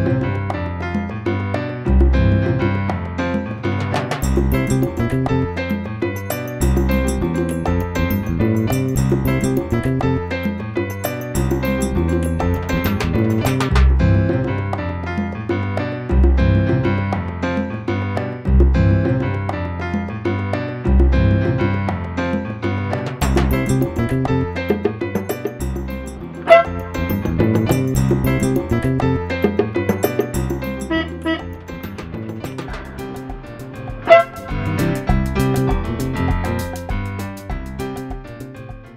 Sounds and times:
Music: 0.0s - 38.9s.

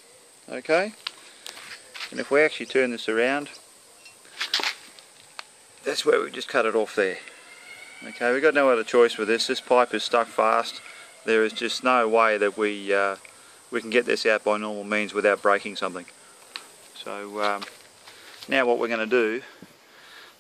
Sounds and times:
Speech: 0.5s - 1.0s, 2.1s - 3.6s, 5.8s - 7.2s, 8.0s - 13.2s, 13.8s - 16.1s, 17.0s - 17.7s, 18.5s - 19.5s.

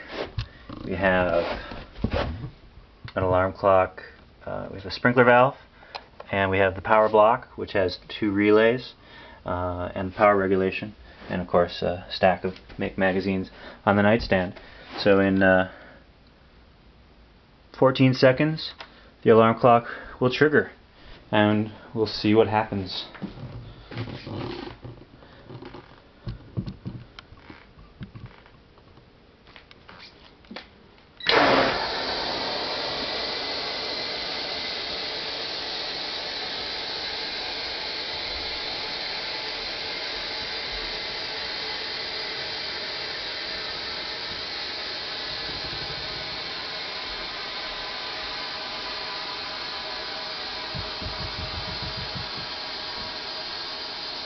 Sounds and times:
Speech: 0.8s - 1.6s, 3.1s - 5.6s, 6.3s - 15.8s, 17.8s - 23.2s.

